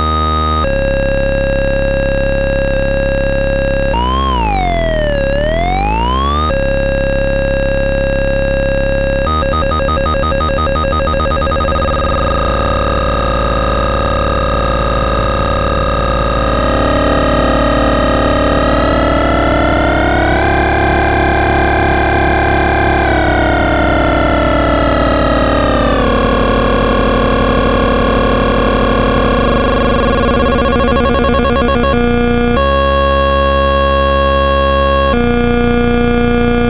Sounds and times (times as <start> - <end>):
Sampler: 0.0 - 36.7.